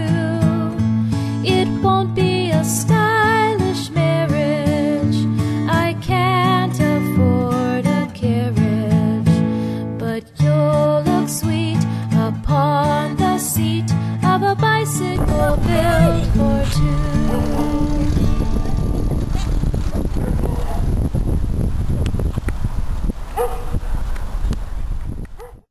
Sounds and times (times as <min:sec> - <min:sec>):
Music: 0:00.0 - 0:20.2
Bicycle: 0:15.4 - 0:25.5.